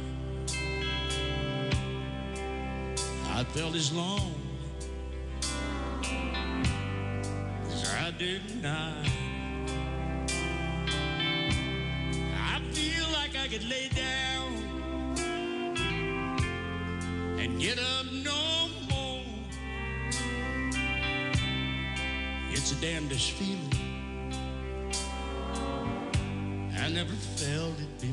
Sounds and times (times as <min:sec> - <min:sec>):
Violin, fiddle: 0:00.0 - 0:28.1.